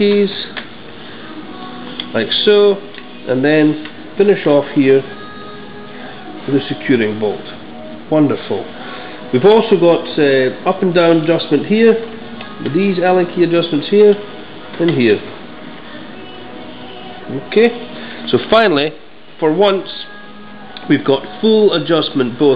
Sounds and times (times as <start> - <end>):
Speech: 0.0 - 0.5, 2.1 - 5.1, 6.5 - 8.7, 9.4 - 12.0, 12.6 - 14.2, 14.8 - 15.3, 17.3 - 20.1, 20.8 - 22.5
Music: 0.0 - 22.5.